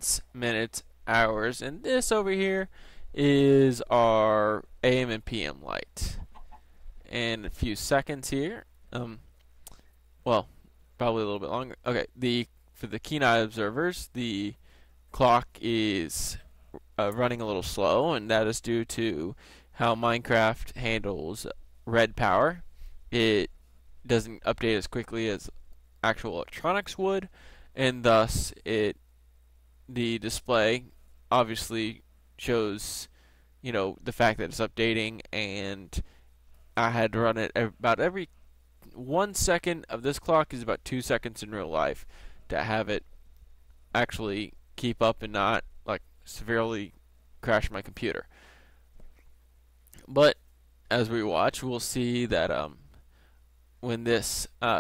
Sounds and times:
Speech: 0:00.0 - 0:06.3, 0:07.1 - 0:09.3, 0:10.2 - 0:23.5, 0:24.1 - 0:29.0, 0:29.9 - 0:36.1, 0:36.8 - 0:43.0, 0:43.9 - 0:48.3, 0:50.0 - 0:53.0, 0:53.8 - 0:54.8.

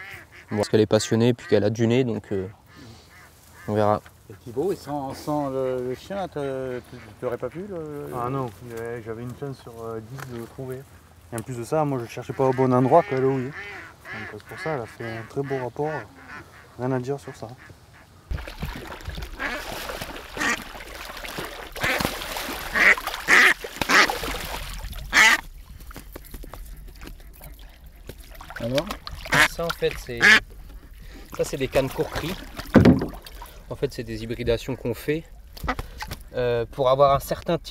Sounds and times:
Duck: 0:00.0 - 0:01.6, 0:02.2 - 0:03.8, 0:12.4 - 0:18.1, 0:19.3 - 0:19.8, 0:20.4 - 0:25.5, 0:26.4 - 0:30.4, 0:35.6 - 0:36.1
Speech: 0:03.7 - 0:16.1, 0:16.8 - 0:17.6, 0:28.6 - 0:30.4, 0:31.4 - 0:32.4, 0:33.7 - 0:35.3, 0:36.3 - 0:37.7.

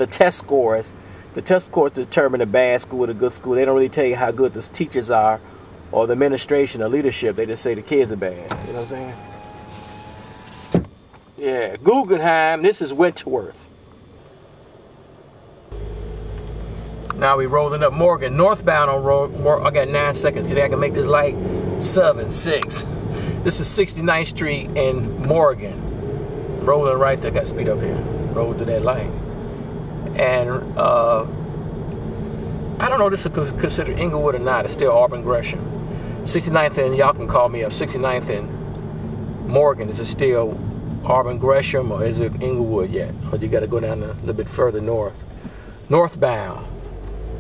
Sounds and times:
Speech: 0:00.0 - 0:09.2, 0:11.4 - 0:13.7, 0:17.1 - 0:25.8, 0:26.6 - 0:29.2, 0:30.1 - 0:31.3, 0:32.8 - 0:35.7, 0:36.3 - 0:38.5, 0:39.5 - 0:45.2, 0:45.9 - 0:46.8
Power windows, electric windows: 0:08.5 - 0:11.0.

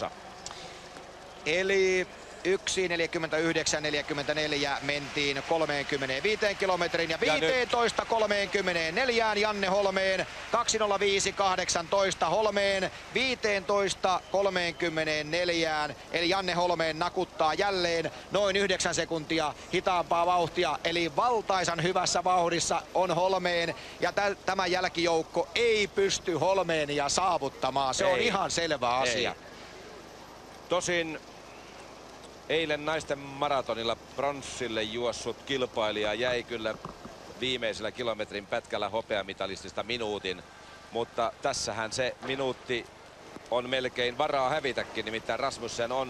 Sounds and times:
Speech: 0:01.4 - 0:29.4, 0:30.7 - 0:31.2, 0:32.5 - 0:36.8, 0:37.4 - 0:40.4, 0:41.0 - 0:42.9, 0:43.5 - 0:46.1.

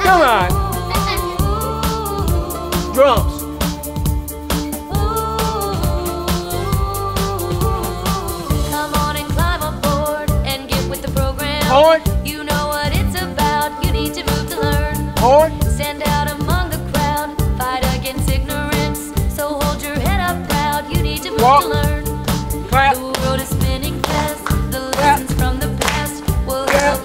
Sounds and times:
Speech: 0:00.0 - 0:01.3, 0:02.9 - 0:03.4, 0:11.6 - 0:12.0, 0:15.2 - 0:15.5, 0:21.4 - 0:21.8, 0:22.7 - 0:23.0, 0:25.0 - 0:25.2, 0:26.7 - 0:27.0.

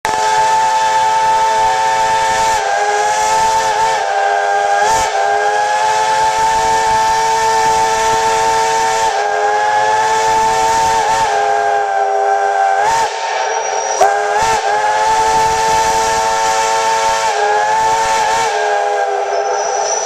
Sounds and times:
Steam whistle: 0:00.0 - 0:20.0.

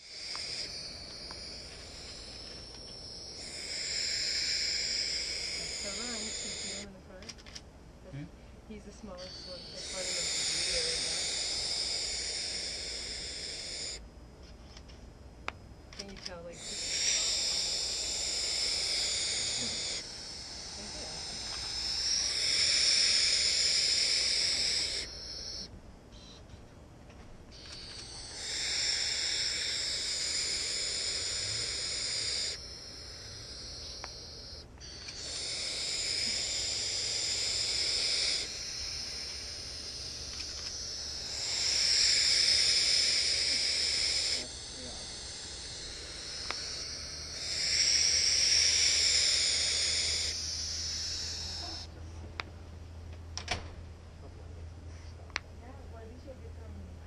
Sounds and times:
Bird: 0:00.0 - 0:07.4, 0:08.8 - 0:14.0, 0:16.0 - 0:26.8, 0:27.5 - 0:52.0.

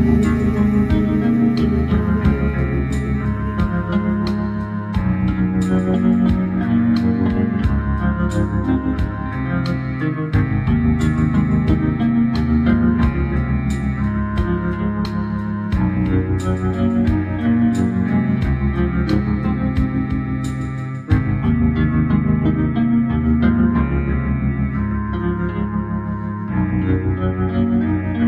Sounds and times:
Ambient music: 0:00.0 - 0:28.2.

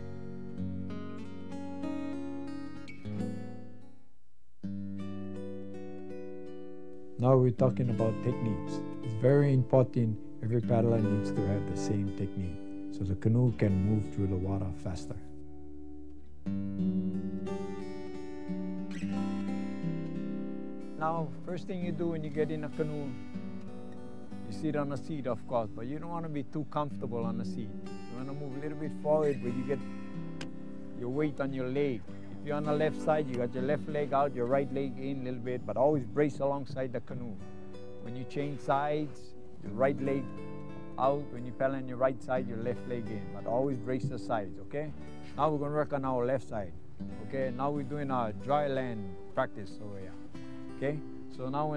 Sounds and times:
Music: 0:00.0 - 0:51.7
Speech: 0:07.2 - 0:15.3, 0:21.0 - 0:23.2, 0:24.5 - 0:29.8, 0:31.0 - 0:37.4, 0:38.0 - 0:40.3, 0:41.0 - 0:50.2, 0:50.8 - 0:51.7.

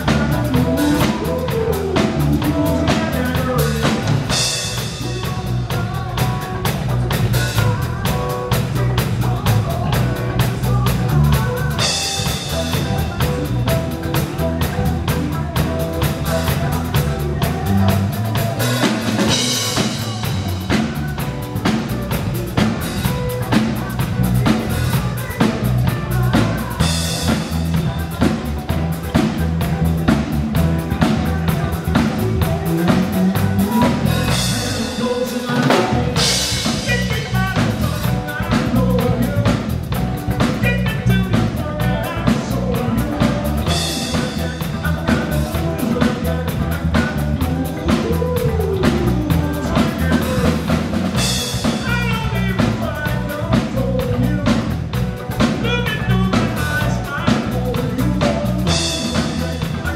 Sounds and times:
Rock and roll: 0:00.0 - 0:59.9.

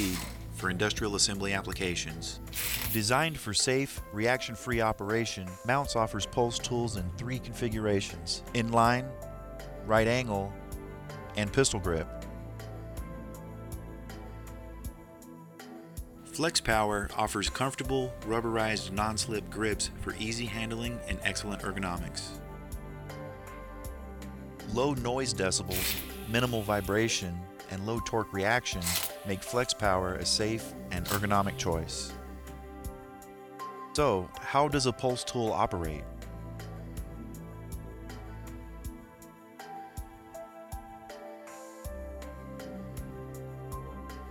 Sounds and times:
Speech: 0:00.0 - 0:09.2, 0:09.8 - 0:10.5, 0:11.3 - 0:12.1, 0:16.3 - 0:22.4, 0:24.7 - 0:32.2, 0:34.0 - 0:36.1
Music: 0:00.0 - 0:44.3.

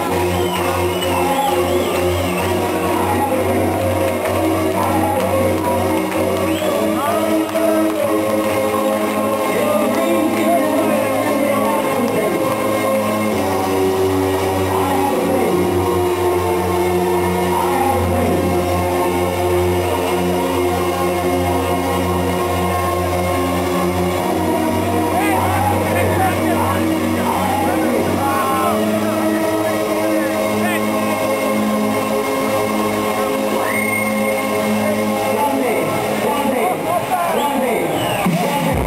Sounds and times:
Crowd: 0:00.0 - 0:38.8
Music: 0:00.0 - 0:38.8
Speech: 0:02.8 - 0:04.0, 0:04.6 - 0:05.8, 0:06.5 - 0:08.3, 0:09.5 - 0:12.6, 0:14.7 - 0:15.7, 0:25.1 - 0:31.2, 0:35.1 - 0:38.8
Screaming: 0:33.6 - 0:34.5.

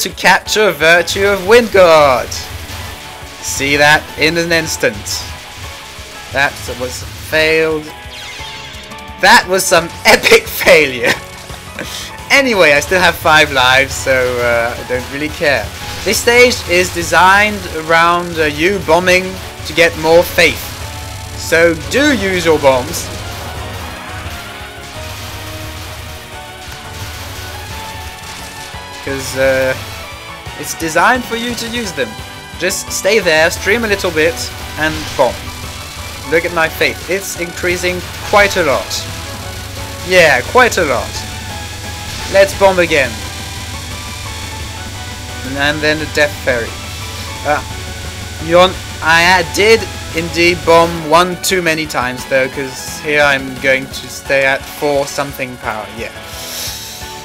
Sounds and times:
Speech: 0:00.0 - 0:02.4, 0:03.4 - 0:05.3, 0:06.4 - 0:07.9, 0:09.2 - 0:11.2, 0:12.3 - 0:20.7, 0:21.4 - 0:23.1, 0:29.1 - 0:29.8, 0:30.6 - 0:35.4, 0:36.3 - 0:39.0, 0:40.1 - 0:41.2, 0:42.3 - 0:43.2, 0:45.4 - 0:46.7, 0:47.4 - 0:47.6, 0:48.4 - 0:56.2
Music: 0:00.0 - 0:57.2.

